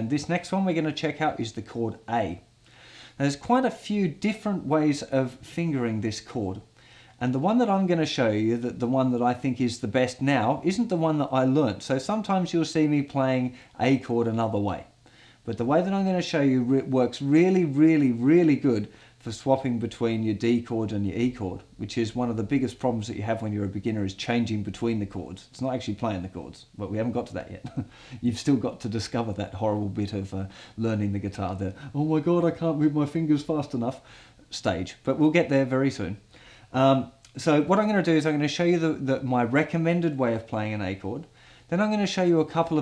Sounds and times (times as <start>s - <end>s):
Speech: 0.0s - 2.5s, 3.2s - 42.8s.